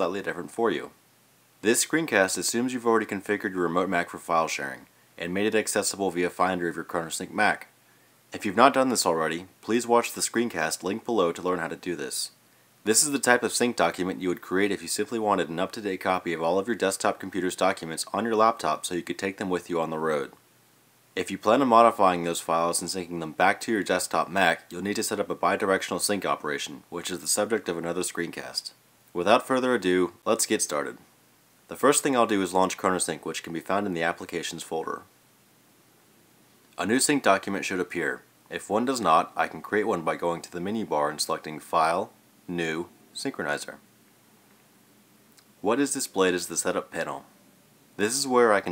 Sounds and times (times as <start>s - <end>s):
Speech: 0.0s - 1.0s, 1.6s - 7.7s, 8.3s - 20.4s, 21.2s - 31.0s, 31.7s - 35.1s, 36.8s - 43.8s, 45.6s - 47.3s, 48.0s - 48.7s.